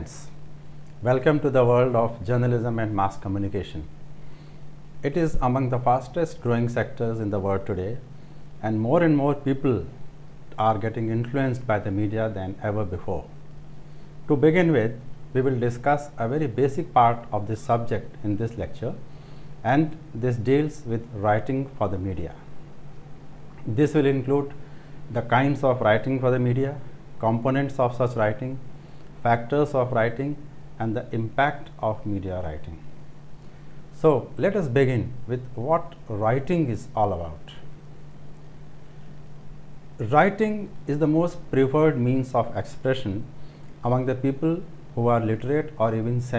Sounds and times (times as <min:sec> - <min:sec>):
Speech: 0:00.0 - 0:00.4, 0:01.0 - 0:03.9, 0:05.0 - 0:10.0, 0:10.6 - 0:13.4, 0:14.3 - 0:19.0, 0:19.6 - 0:22.5, 0:23.6 - 0:28.6, 0:29.2 - 0:32.8, 0:34.0 - 0:37.7, 0:40.0 - 0:46.3.